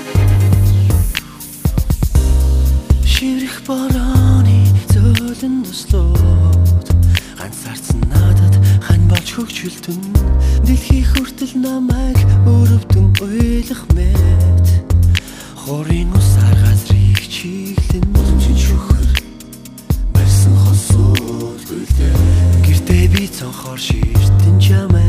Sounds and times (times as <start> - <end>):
Vocal music: 0.0 - 25.0.